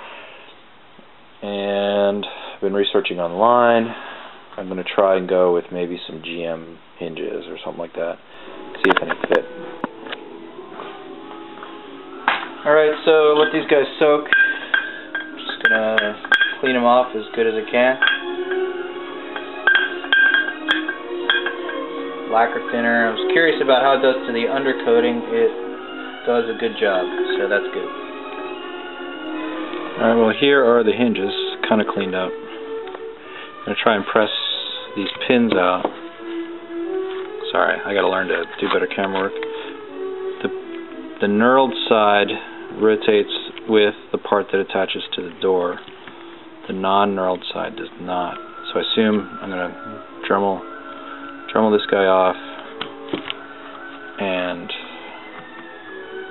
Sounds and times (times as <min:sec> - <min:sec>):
Speech: 0:01.4 - 0:04.0, 0:04.6 - 0:08.2, 0:08.8 - 0:09.5, 0:12.6 - 0:14.3, 0:15.4 - 0:18.0, 0:22.3 - 0:25.6, 0:26.2 - 0:27.9, 0:30.0 - 0:32.4, 0:33.7 - 0:35.9, 0:37.4 - 0:39.4, 0:41.2 - 0:45.8, 0:46.7 - 0:50.6, 0:51.5 - 0:52.4, 0:54.2 - 0:54.8
Music: 0:04.6 - 0:56.3.